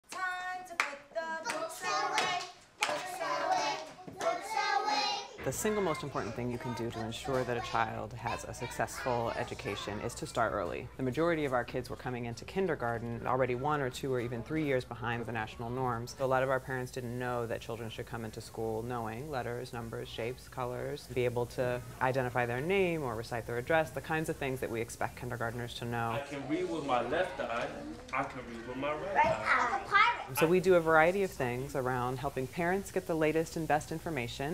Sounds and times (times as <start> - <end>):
Clapping: 0.8 - 3.2
Child speech, kid speaking: 4.5 - 10.2, 29.0 - 30.4.